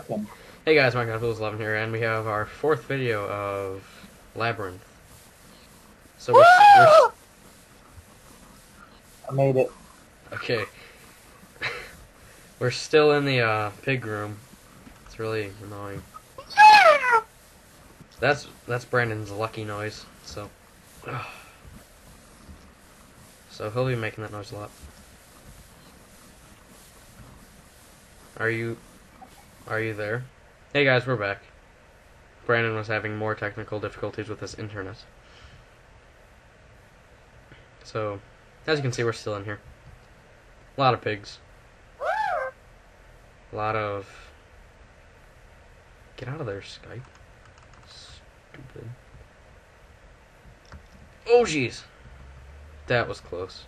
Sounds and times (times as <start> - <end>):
Speech: 0.0 - 3.8, 4.4 - 4.8, 9.3 - 9.7, 10.3 - 10.8, 12.6 - 14.4, 15.1 - 16.0, 18.2 - 20.5, 23.5 - 24.8, 28.4 - 28.8, 29.7 - 31.5, 32.5 - 35.1, 37.8 - 39.6, 40.8 - 41.4, 43.5 - 44.3, 46.2 - 47.1, 47.8 - 49.0, 51.3 - 51.9, 52.9 - 53.6.